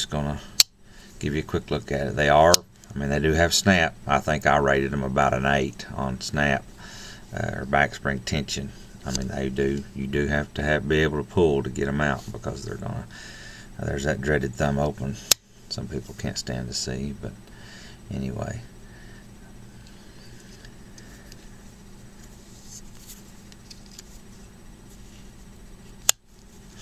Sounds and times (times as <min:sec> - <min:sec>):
Speech: 0:00.0 - 0:00.5, 0:01.2 - 0:06.7, 0:07.3 - 0:13.1, 0:13.8 - 0:17.4, 0:18.1 - 0:18.7.